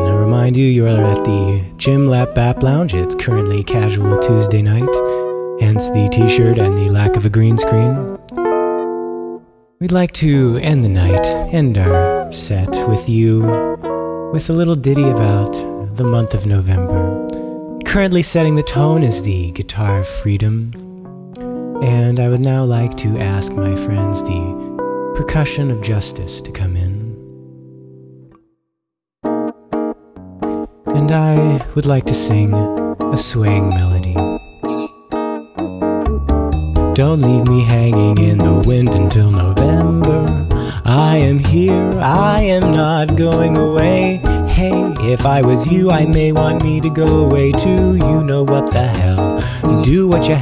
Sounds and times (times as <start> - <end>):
Speech: 0.0 - 8.1, 9.8 - 13.6, 14.3 - 17.2, 17.8 - 20.8, 21.8 - 24.6, 25.2 - 27.2, 31.0 - 34.9, 37.0 - 40.3
Music: 0.0 - 50.4.